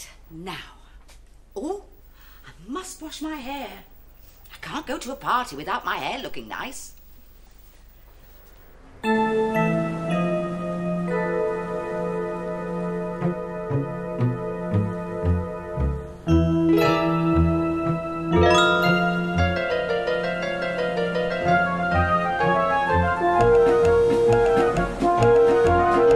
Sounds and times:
Speech: 1.6s - 1.9s, 2.6s - 3.9s, 4.5s - 7.0s
Music: 9.1s - 26.1s.

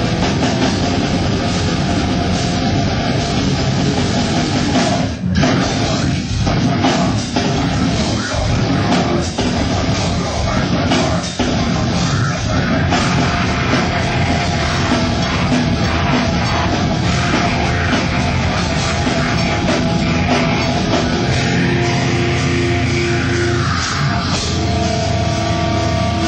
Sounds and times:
Music: 0.0s - 26.2s.

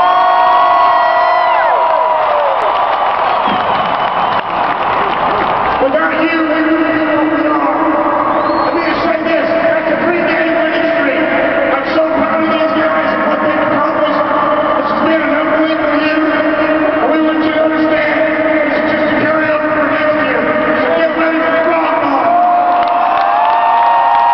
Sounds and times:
Male speech, man speaking: 5.8s - 8.0s, 8.6s - 22.4s
Narration, monologue: 5.8s - 22.4s.

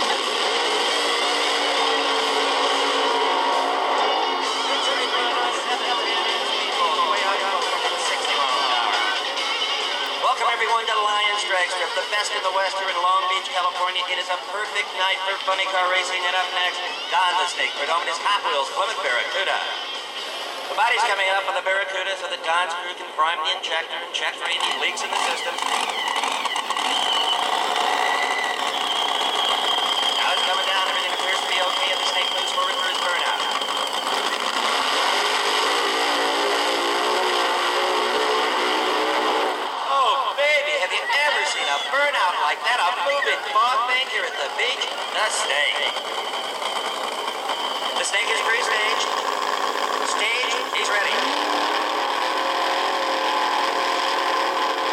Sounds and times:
Speech: 4.6s - 9.2s, 10.2s - 19.8s, 20.8s - 25.6s, 30.2s - 33.5s, 39.9s - 46.0s, 48.0s - 49.1s, 50.1s - 51.3s.

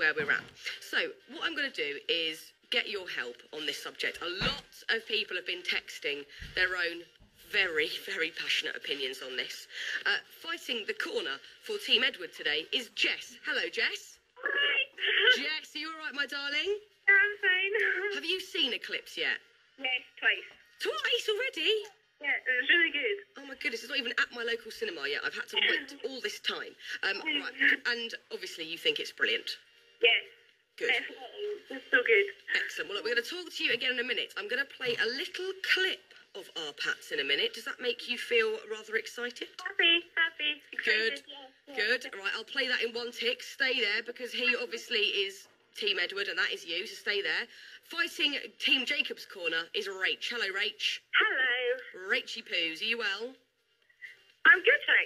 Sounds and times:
Speech: 0.0s - 19.4s, 20.8s - 29.6s.

